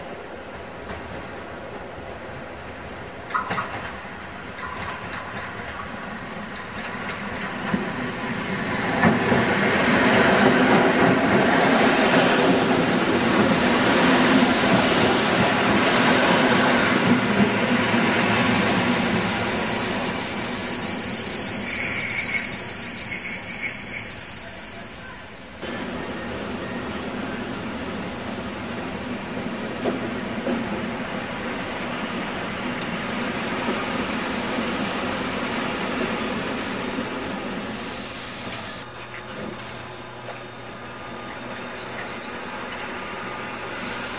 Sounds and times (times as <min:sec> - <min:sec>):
Railroad car, train wagon: 0:00.0 - 0:44.1
Subway, metro, underground: 0:00.0 - 0:44.1
Train: 0:00.0 - 0:44.1.